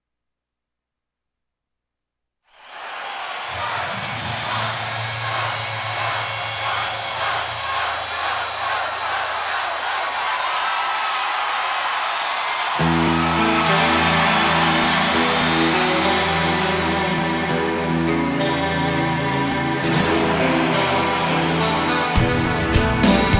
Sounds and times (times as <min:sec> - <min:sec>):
Guitar: 0:03.5 - 0:08.2, 0:12.8 - 0:23.3.